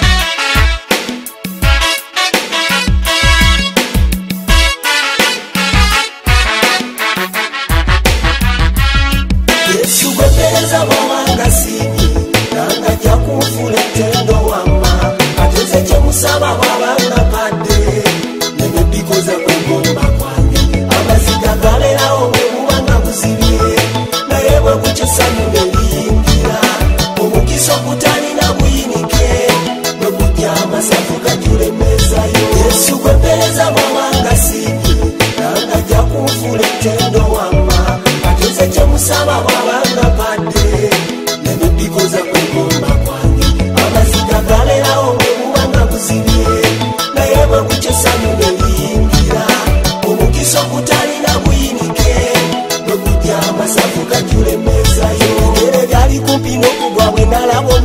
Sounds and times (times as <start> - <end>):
Pop music: 0.0 - 57.8.